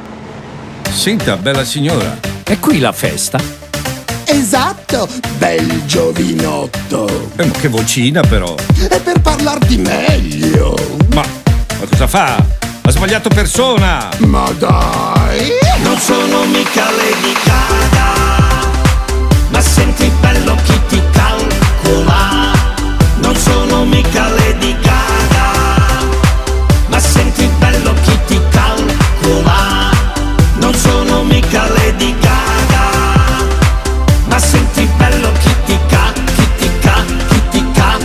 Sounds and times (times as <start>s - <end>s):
Music: 0.1s - 38.0s
Speech: 0.9s - 3.5s, 4.2s - 15.8s.